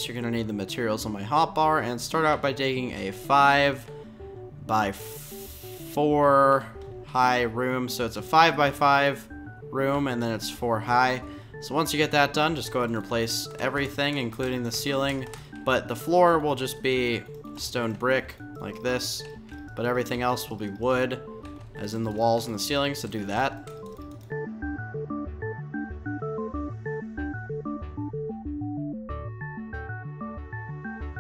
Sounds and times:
Speech: 0.0 - 3.8, 4.7 - 5.1, 6.0 - 21.2, 21.8 - 23.6
Music: 0.0 - 31.2.

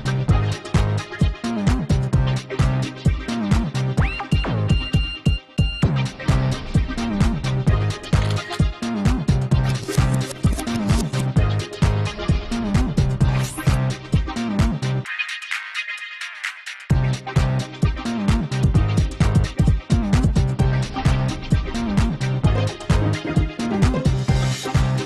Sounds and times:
Soundtrack music: 0.0 - 25.0.

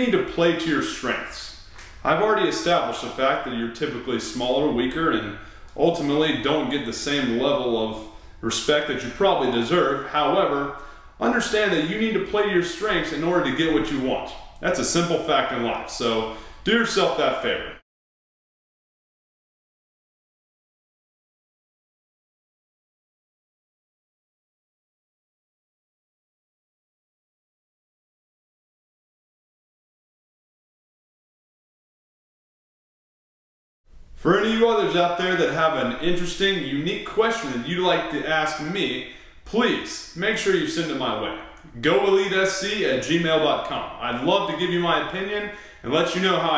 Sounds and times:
Speech: 0.0 - 17.8, 34.2 - 46.5.

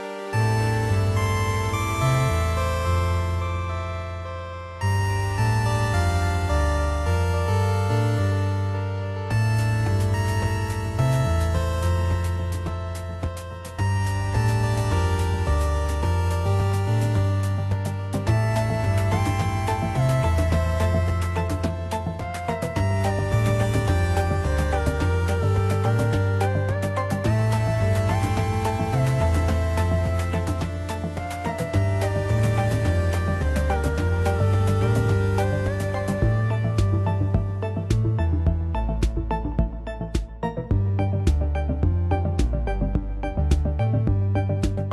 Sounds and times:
Music: 0.0 - 44.9.

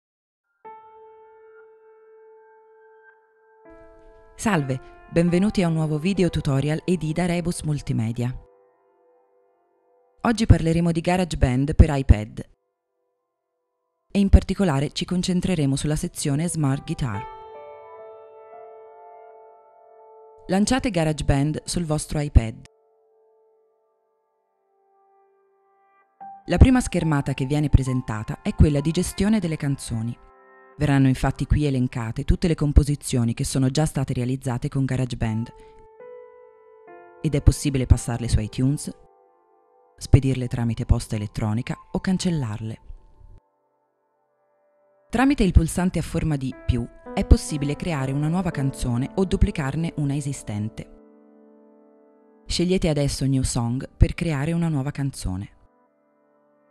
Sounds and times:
Music: 0.4 - 56.7
Speech: 4.4 - 8.4, 10.3 - 12.5, 14.2 - 17.2, 20.5 - 22.7, 26.5 - 30.2, 30.8 - 35.6, 37.3 - 39.0, 40.0 - 42.8, 45.2 - 50.9, 52.5 - 55.6.

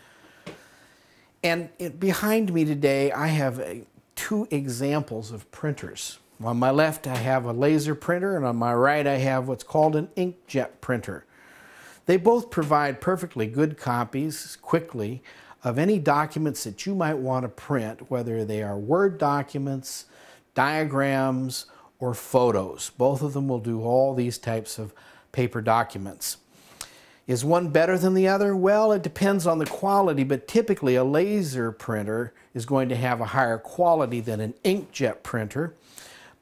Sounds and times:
Speech: 1.4 - 11.3, 12.0 - 26.4, 27.3 - 35.8.

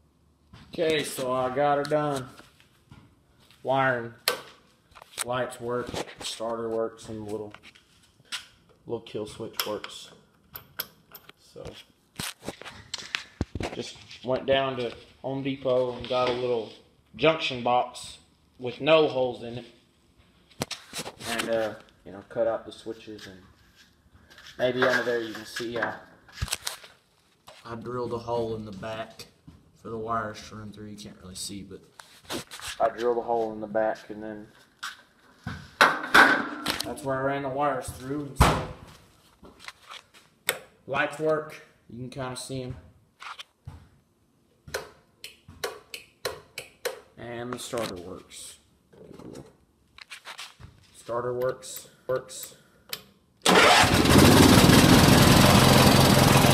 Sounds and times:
Speech: 0.7 - 2.4, 3.6 - 4.2, 5.2 - 7.6, 8.9 - 10.2, 13.7 - 19.8, 21.2 - 23.5, 24.6 - 26.1, 27.6 - 31.9, 32.8 - 34.6, 36.8 - 38.6, 40.9 - 42.8, 47.2 - 49.4, 51.0 - 52.6.

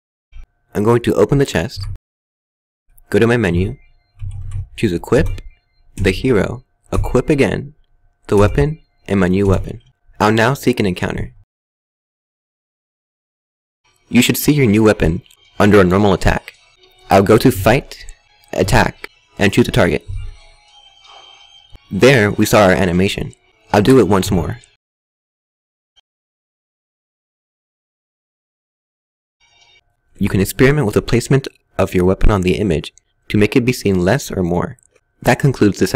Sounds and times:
Narration, monologue: 0.4 - 2.0, 2.9 - 11.5, 13.9 - 24.8, 29.8 - 35.9.

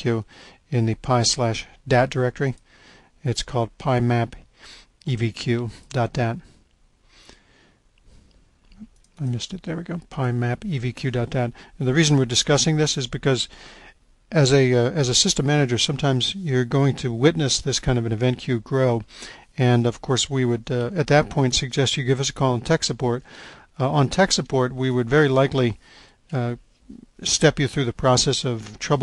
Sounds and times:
Speech: 0.0 - 2.6, 3.2 - 4.4, 5.0 - 6.5, 8.8 - 13.5, 14.3 - 29.0.

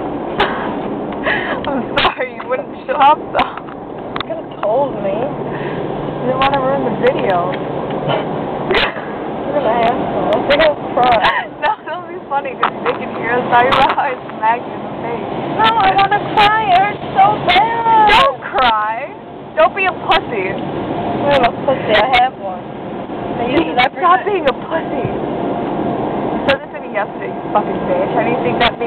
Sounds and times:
Car: 0.0 - 28.8.

